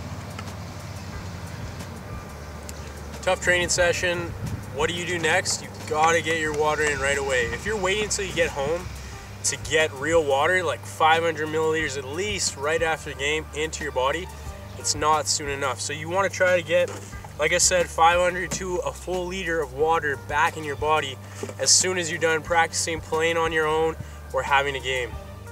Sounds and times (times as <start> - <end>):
Music: 0.0 - 25.5
Speech: 3.3 - 8.9, 9.5 - 25.2.